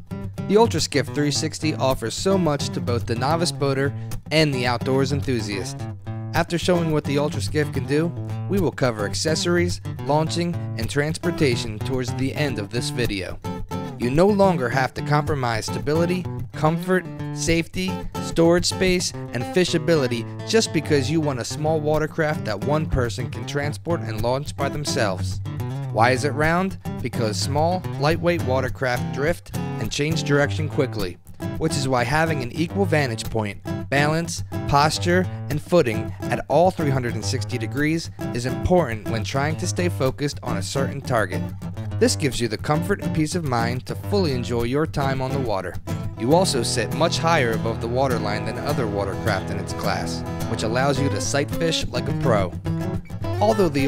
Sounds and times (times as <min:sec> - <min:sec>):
Music: 0:00.0 - 0:53.8
Speech: 0:00.5 - 0:05.8, 0:06.4 - 0:13.4, 0:14.0 - 0:25.4, 0:26.0 - 0:41.4, 0:42.0 - 0:52.6, 0:53.4 - 0:53.8.